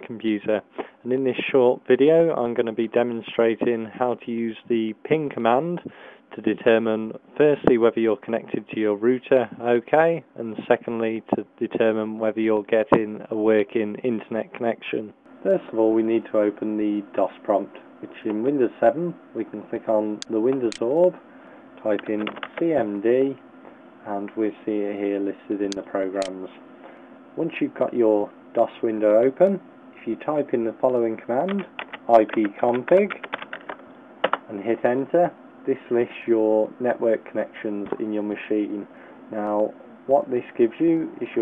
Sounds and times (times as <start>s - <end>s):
Speech: 0.0s - 21.2s, 21.8s - 23.4s, 24.0s - 26.6s, 27.4s - 33.3s, 34.5s - 41.4s.